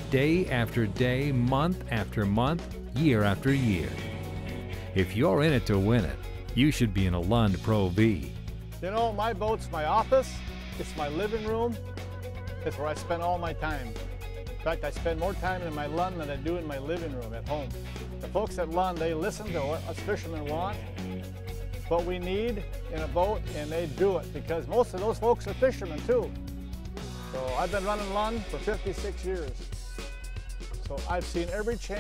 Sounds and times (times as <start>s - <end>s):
Speech: 0.0s - 4.1s, 5.0s - 11.8s, 12.6s - 13.9s, 14.7s - 20.8s, 21.9s - 26.3s, 27.4s - 29.6s, 30.9s - 32.0s
Music: 0.0s - 32.0s.